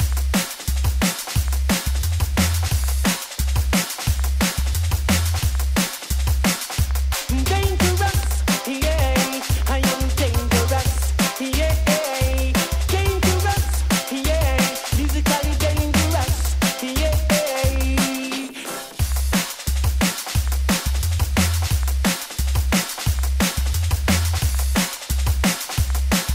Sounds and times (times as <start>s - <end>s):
Drum and bass: 0.0s - 26.3s.